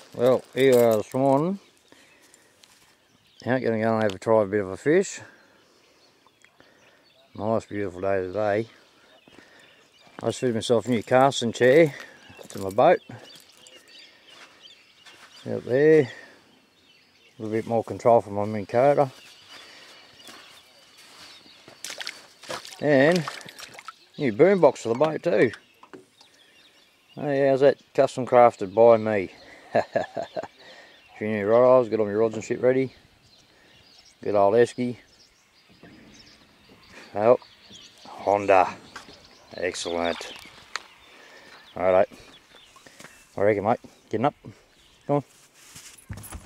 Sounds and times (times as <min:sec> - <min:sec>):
Speech: 0:00.1 - 0:01.6, 0:03.4 - 0:05.3, 0:07.3 - 0:08.8, 0:10.2 - 0:13.2, 0:15.4 - 0:16.3, 0:17.4 - 0:19.2, 0:22.7 - 0:23.4, 0:24.2 - 0:25.6, 0:27.2 - 0:29.4, 0:31.2 - 0:33.0, 0:34.2 - 0:35.0, 0:37.1 - 0:37.4, 0:38.1 - 0:38.8, 0:39.5 - 0:40.4, 0:41.8 - 0:42.1, 0:43.4 - 0:45.3.